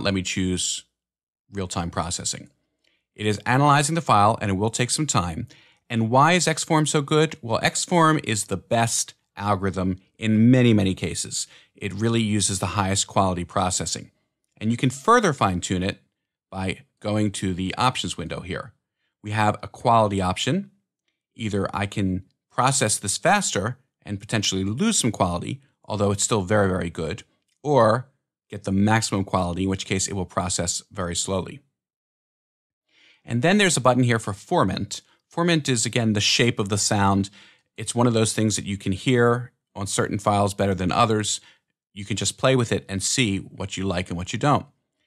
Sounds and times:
Speech: 0.0 - 0.9, 1.5 - 2.5, 3.2 - 20.7, 21.4 - 31.7, 33.3 - 44.7.

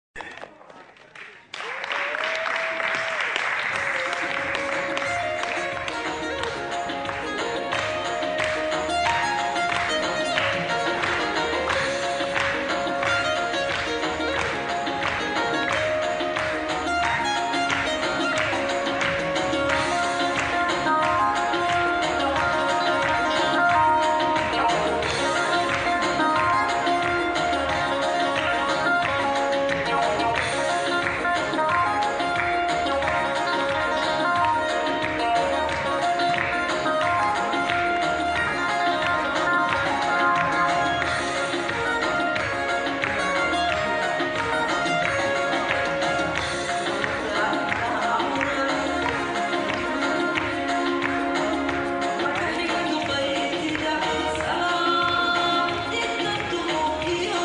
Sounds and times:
Folk music: 3.6 - 57.4.

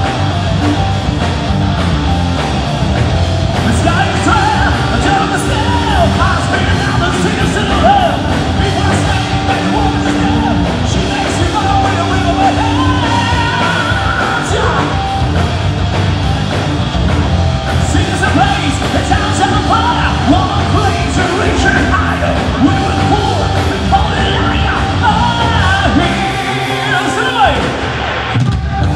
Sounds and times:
Music: 0.0 - 28.9.

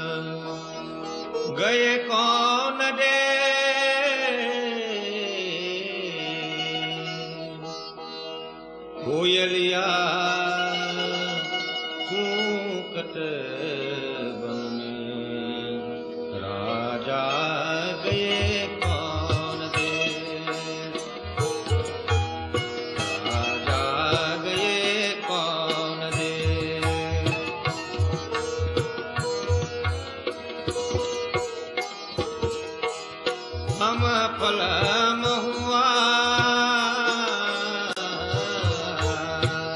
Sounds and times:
Background music: 8.4 - 39.7.

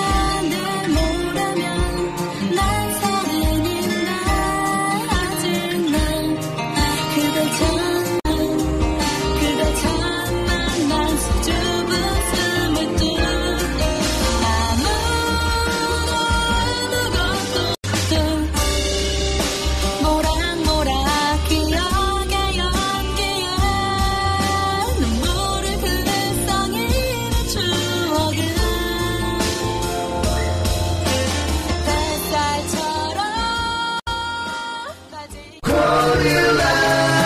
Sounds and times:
Music: 0.0 - 37.2.

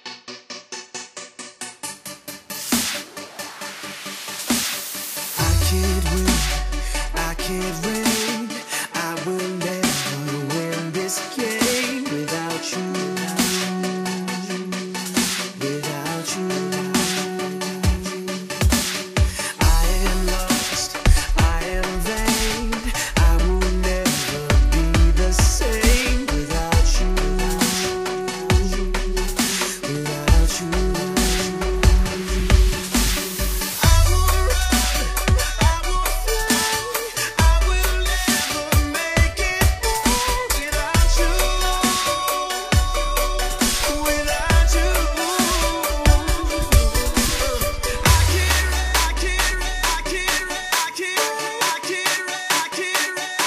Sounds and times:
Dubstep: 0.0 - 53.4.

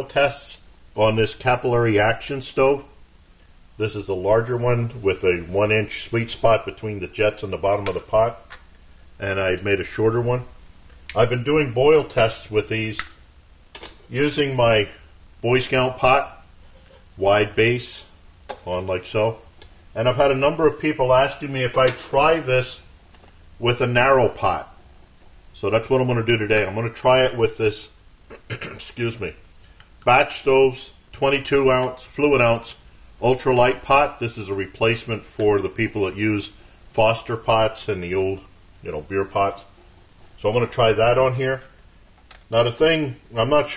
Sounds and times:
Speech: 0.0 - 3.0, 3.8 - 8.5, 9.2 - 13.1, 14.1 - 16.4, 17.2 - 22.9, 23.6 - 24.8, 25.6 - 29.4, 30.0 - 39.8, 40.4 - 41.8, 42.5 - 43.7.

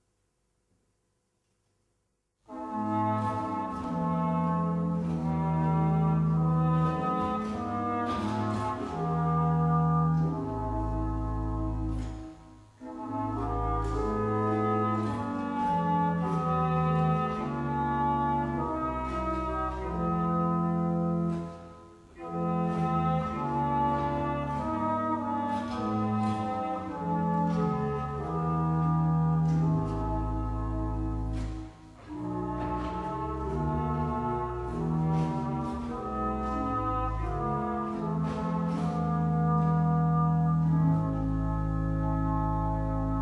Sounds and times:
Trumpet: 2.5 - 43.2.

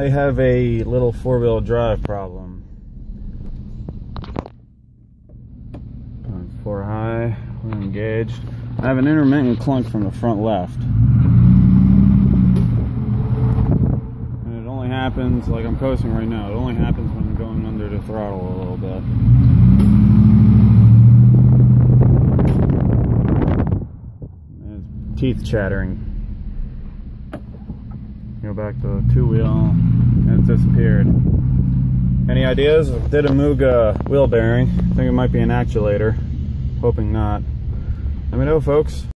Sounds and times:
Speech: 0.0 - 2.6, 6.3 - 10.9, 14.5 - 19.1, 24.6 - 26.0, 28.3 - 31.2, 32.3 - 36.2, 36.8 - 37.4, 38.3 - 39.1.

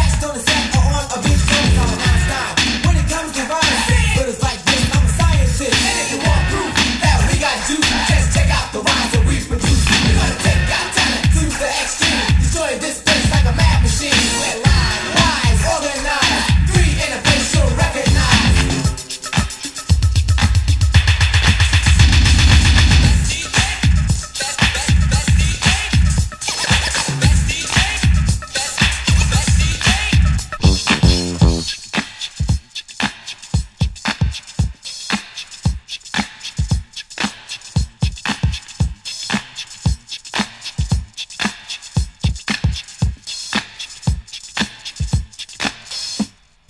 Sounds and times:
Music: 0.0 - 46.5.

